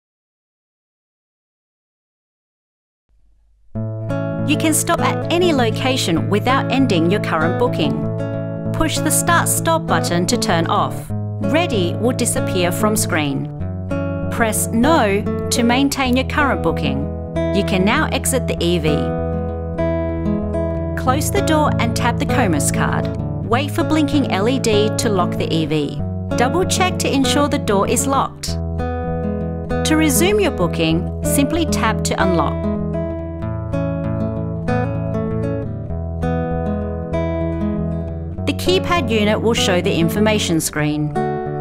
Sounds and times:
Music: 3.1 - 41.6
Speech: 4.5 - 8.1, 8.8 - 13.5, 14.4 - 19.1, 21.0 - 28.6, 29.9 - 32.6, 38.5 - 41.2.

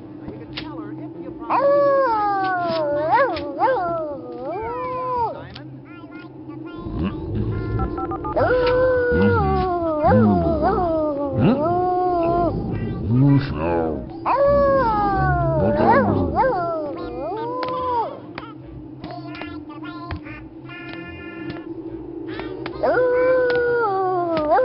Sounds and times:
Speech: 0.1 - 21.6
Howl: 1.5 - 5.4, 6.9 - 18.2, 22.3 - 24.6.

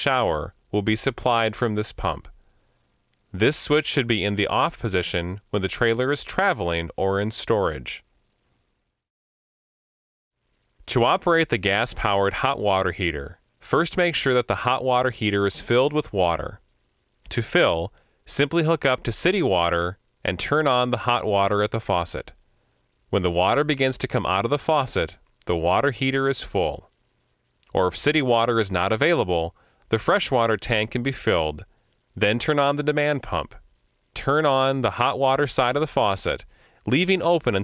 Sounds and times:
Speech: 0.0 - 2.3, 3.3 - 8.0, 10.8 - 16.6, 17.3 - 22.4, 23.1 - 26.9, 27.6 - 33.6, 34.2 - 37.6.

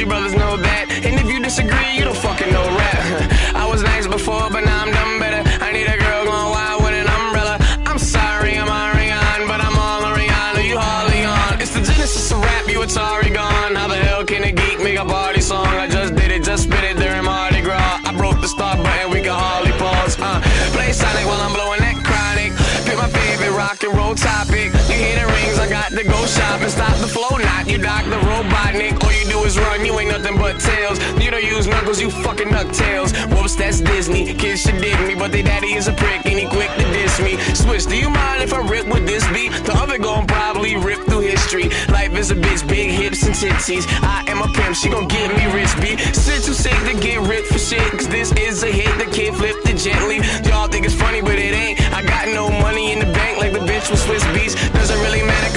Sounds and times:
Exciting music: 0.0 - 55.5.

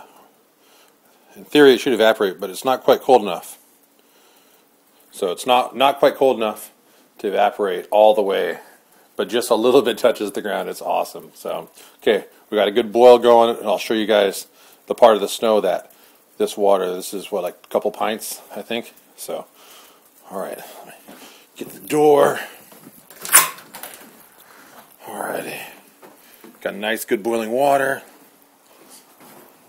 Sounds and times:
Boiling: 0.0 - 29.6
Speech: 1.3 - 3.6, 5.1 - 19.5, 20.2 - 21.0, 21.6 - 22.6, 25.0 - 25.8, 26.6 - 28.1.

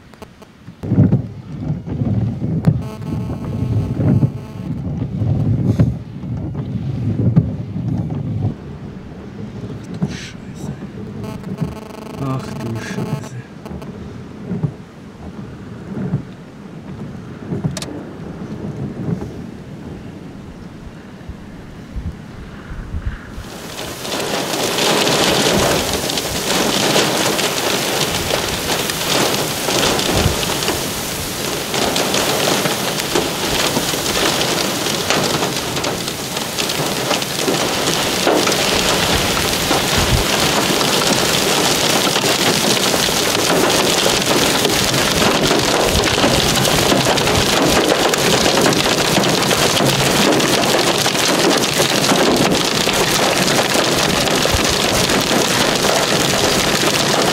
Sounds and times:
Raindrop: 0.0 - 6.6, 7.2 - 19.3, 23.4 - 57.3
Rain on surface: 0.0 - 57.3
Thunder: 0.8 - 10.2, 13.0 - 16.3, 16.9 - 20.2, 22.6 - 57.3.

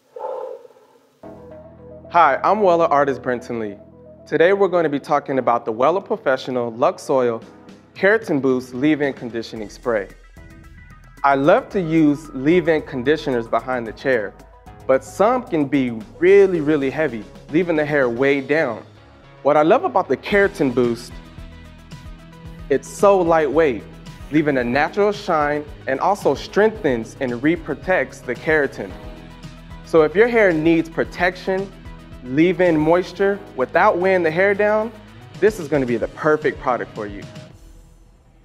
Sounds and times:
Music: 1.1 - 38.4
Speech: 2.1 - 7.4, 8.0 - 10.2, 11.2 - 21.2, 22.7 - 29.0, 29.9 - 31.7, 32.3 - 37.3.

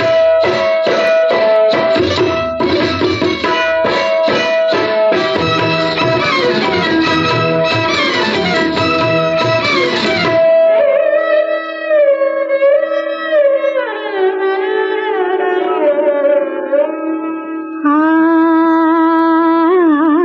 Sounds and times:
Music of Bollywood: 0.0 - 20.2.

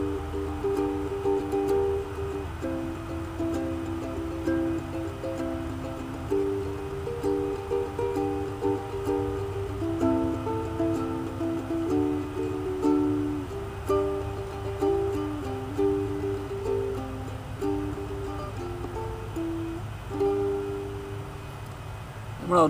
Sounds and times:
Music: 0.0 - 21.2.

